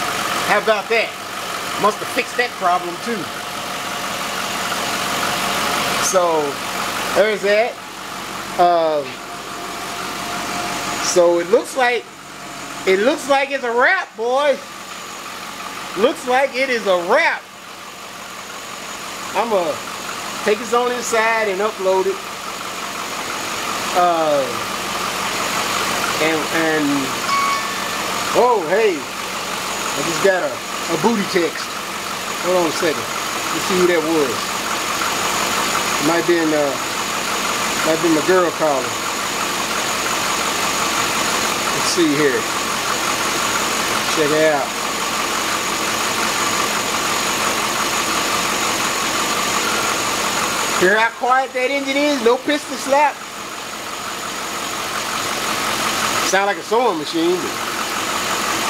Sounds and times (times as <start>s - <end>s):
Vehicle: 0.0s - 58.6s
Speech: 0.4s - 1.2s, 1.8s - 3.3s, 6.0s - 7.8s, 8.6s - 9.2s, 11.0s - 12.1s, 12.9s - 14.7s, 16.0s - 17.5s, 19.3s - 19.8s, 20.4s - 22.2s, 23.9s - 24.6s, 26.2s - 27.2s, 28.3s - 29.1s, 30.0s - 31.8s, 32.4s - 34.5s, 36.0s - 36.8s, 37.8s - 39.0s, 41.7s - 42.5s, 44.0s - 44.8s, 50.8s - 53.2s, 56.2s - 57.6s.